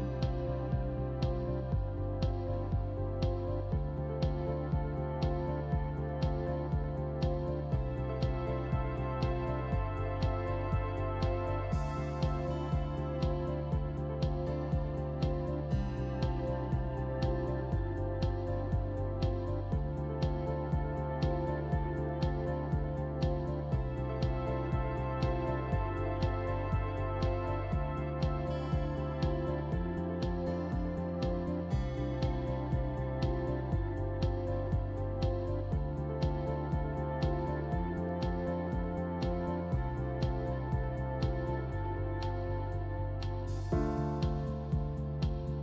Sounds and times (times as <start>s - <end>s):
Music: 0.0s - 45.6s.